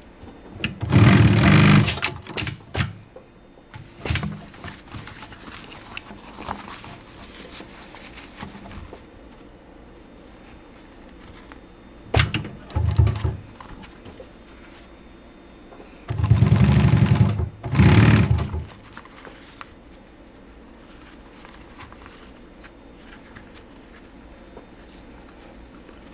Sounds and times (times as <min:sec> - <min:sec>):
Sewing machine: 0:00.6 - 0:03.0, 0:16.1 - 0:18.7.